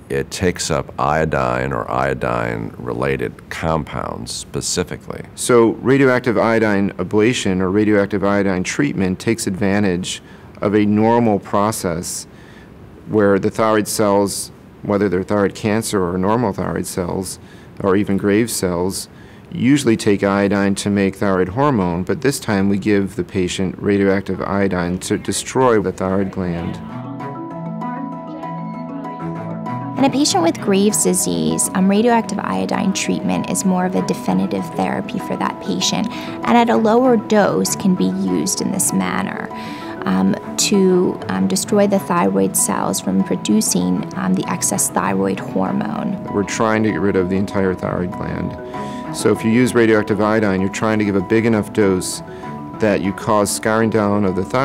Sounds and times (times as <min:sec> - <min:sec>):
Speech: 0:00.0 - 0:12.3, 0:13.1 - 0:26.8, 0:30.0 - 0:48.6, 0:49.2 - 0:52.2, 0:52.8 - 0:54.6.